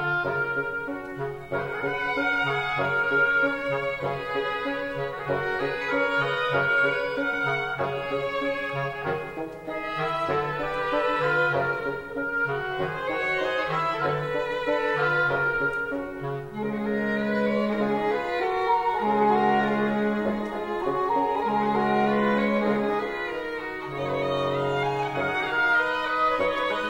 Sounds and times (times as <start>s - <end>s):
Violin, fiddle: 0.0s - 26.9s.